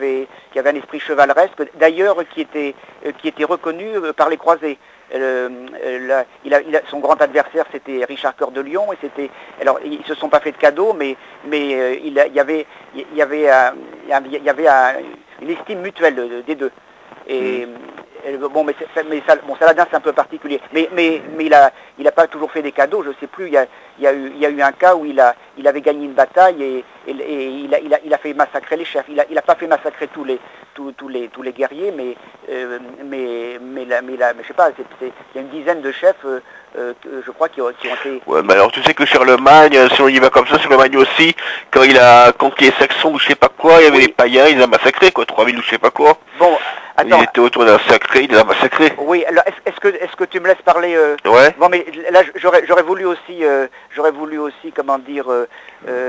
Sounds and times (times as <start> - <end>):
Speech: 0.0 - 56.0
Radio: 13.5 - 21.7, 37.6 - 43.2, 46.4 - 49.1.